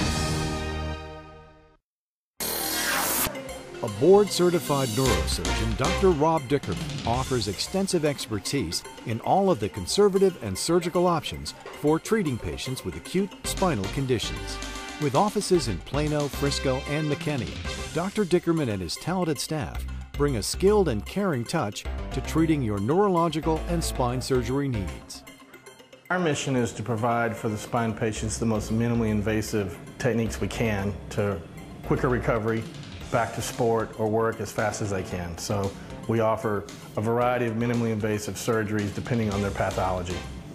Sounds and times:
Music: 0.0s - 1.8s, 2.4s - 40.5s
Speech: 3.8s - 25.3s, 26.1s - 40.2s.

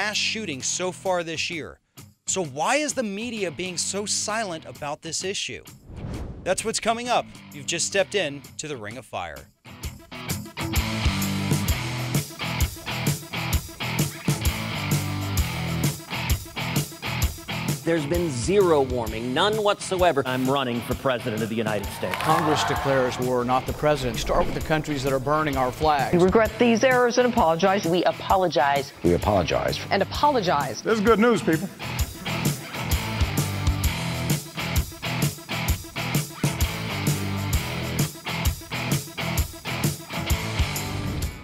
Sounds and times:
Male speech, man speaking: 0.0s - 5.7s, 6.5s - 9.5s, 17.8s - 26.6s, 29.0s - 29.9s, 30.8s - 31.7s
Narration, monologue: 0.0s - 9.6s, 17.8s - 31.8s
Music: 0.0s - 41.4s.

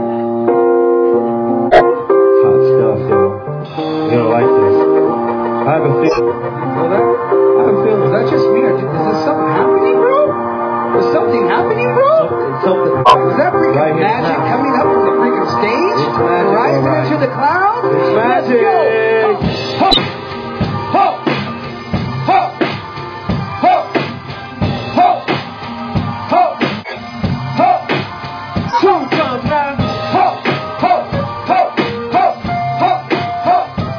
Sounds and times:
Music: 0.0s - 33.9s.

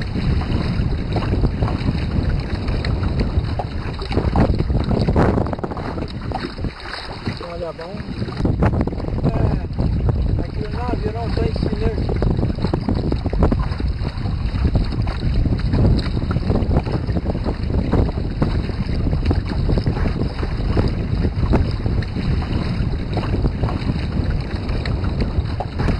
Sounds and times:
Boat, Water vehicle: 0.0s - 25.9s
Speech: 7.4s - 8.1s, 9.3s - 9.7s, 10.4s - 12.1s.

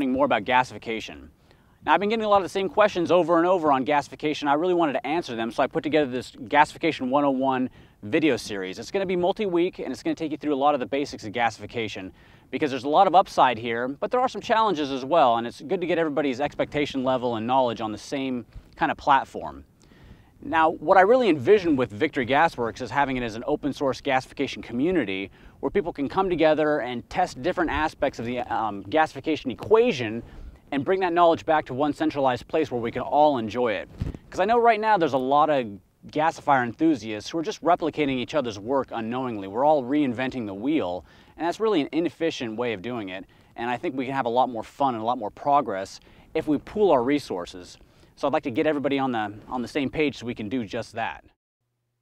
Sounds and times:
Speech: 0.0s - 19.7s, 20.4s - 51.4s.

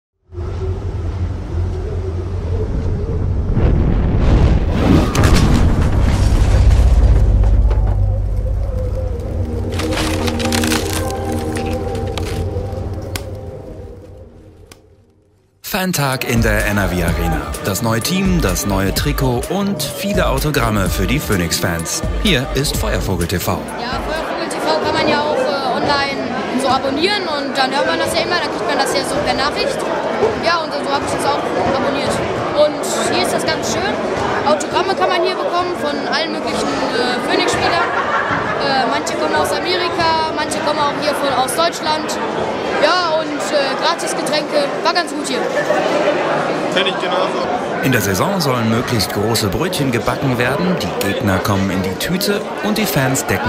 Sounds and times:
Boom: 3.0s - 9.0s
Music: 6.6s - 15.6s, 16.2s - 24.4s.

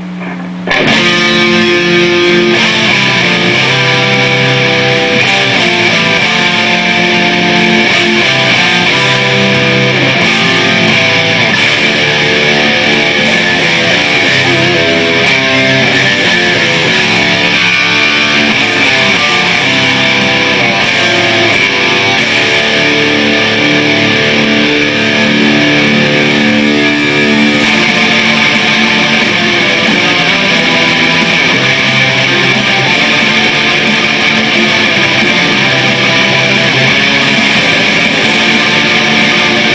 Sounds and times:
Music: 0.7s - 39.7s.

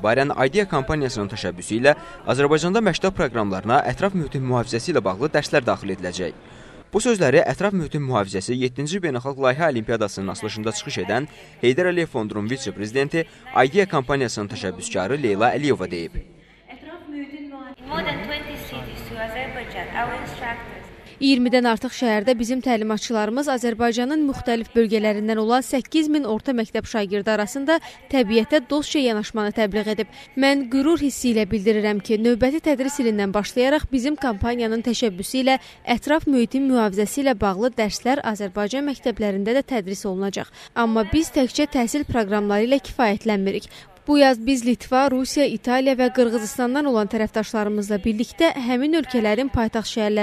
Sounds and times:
Female speech, woman speaking: 0.0s - 4.2s, 10.1s - 16.1s, 16.7s - 50.2s.

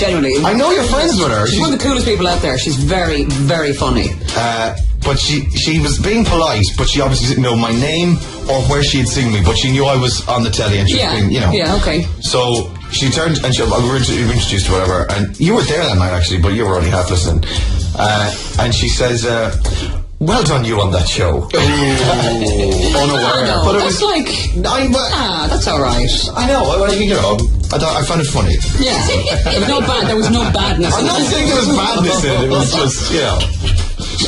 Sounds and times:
Music: 0.0s - 34.2s
Speech: 0.0s - 34.2s.

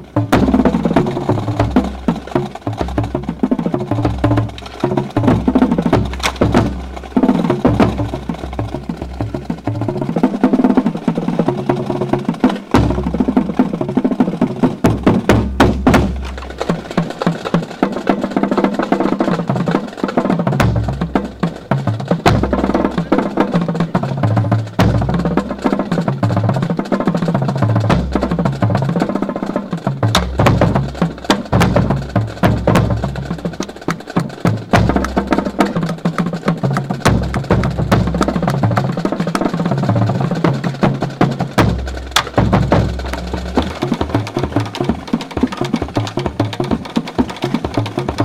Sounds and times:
Drum: 0.0s - 48.2s.

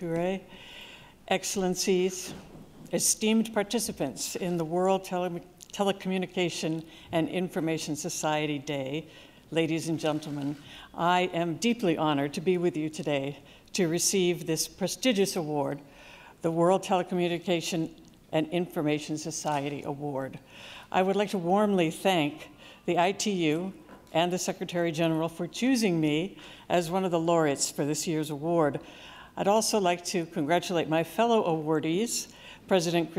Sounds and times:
Narration, monologue: 0.0s - 33.1s
Female speech, woman speaking: 1.3s - 2.3s, 3.0s - 9.0s, 21.0s - 28.8s, 29.4s - 33.1s.

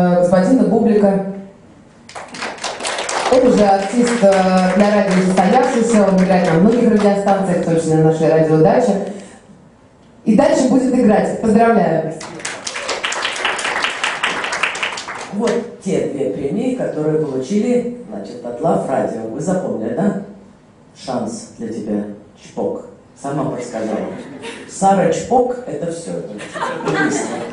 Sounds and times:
Speech: 0.0s - 1.4s, 3.3s - 9.2s, 10.2s - 12.5s, 15.3s - 20.4s, 21.0s - 27.5s.

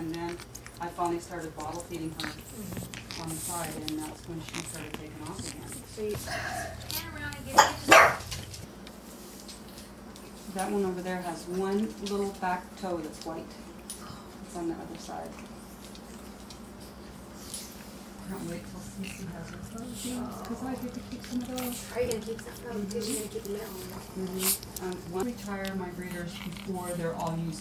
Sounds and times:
Speech: 0.0s - 2.5s, 3.2s - 8.2s, 10.5s - 13.6s, 14.5s - 15.4s, 18.2s - 27.6s
Dog: 0.0s - 8.5s, 19.0s - 27.5s.

